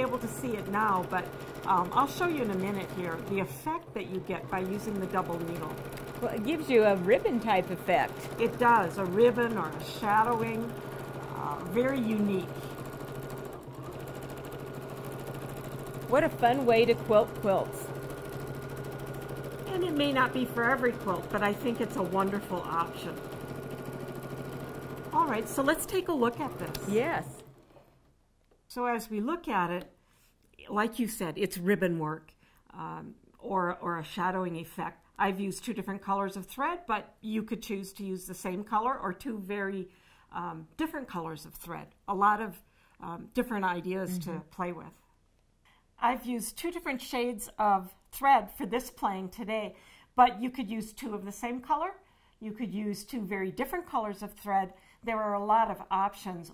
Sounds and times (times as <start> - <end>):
Speech: 0.0 - 10.7, 11.4 - 12.5, 16.1 - 17.8, 19.7 - 23.2, 25.2 - 27.3, 28.7 - 29.9, 30.6 - 39.8, 40.4 - 45.0, 46.0 - 56.5.